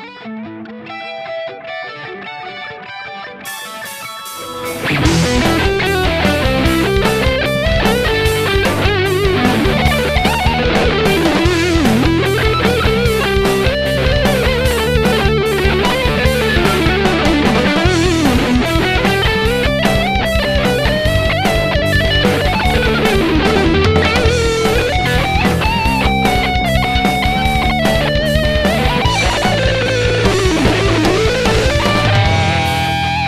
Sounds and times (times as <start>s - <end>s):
Electric guitar: 0.0s - 33.2s.